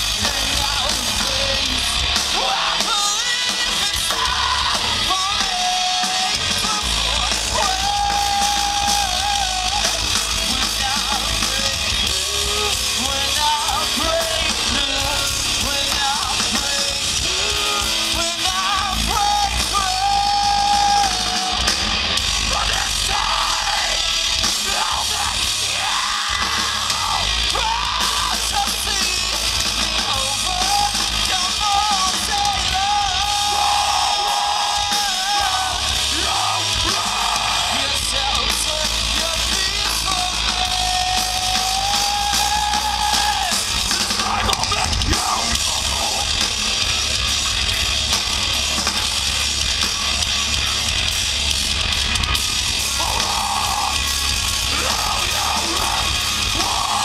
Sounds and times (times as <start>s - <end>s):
Music: 0.0s - 57.0s.